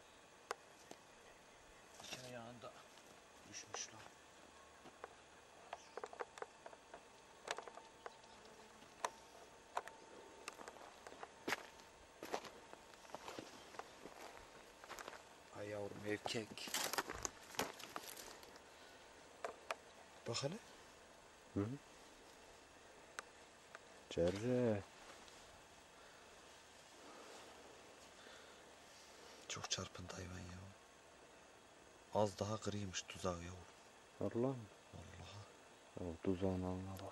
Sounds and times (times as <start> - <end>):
Speech: 2.0 - 4.2, 15.5 - 16.8, 24.1 - 24.9, 29.5 - 30.8, 32.1 - 37.1.